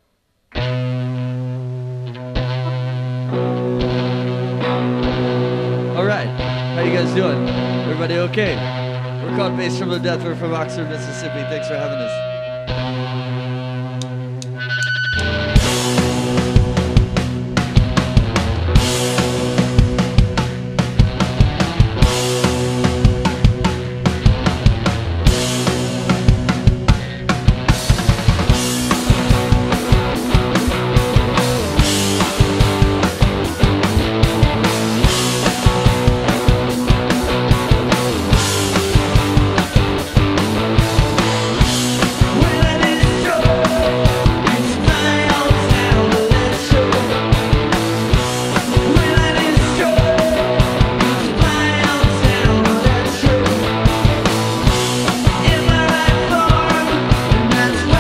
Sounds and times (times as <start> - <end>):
Music: 0.0 - 58.0.